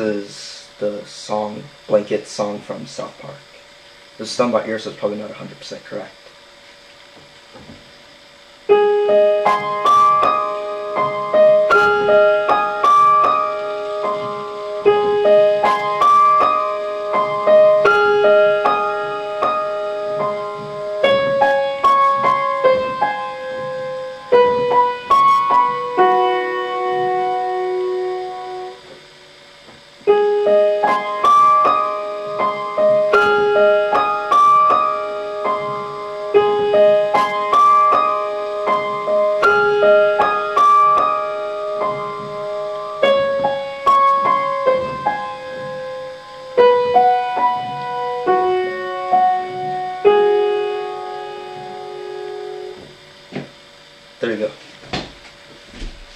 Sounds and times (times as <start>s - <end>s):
Piano: 6.8s - 54.3s
Classical music: 8.7s - 28.9s, 30.1s - 52.9s.